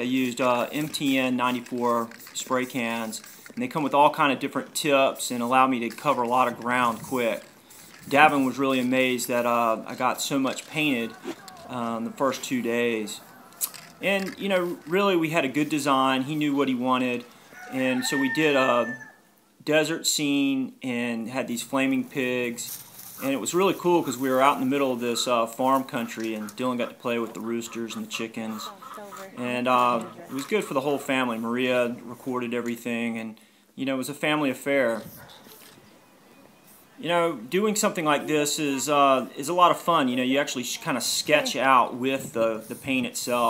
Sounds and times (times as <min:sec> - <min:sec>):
Speech: 0:08.1 - 0:13.2, 0:37.0 - 0:43.4.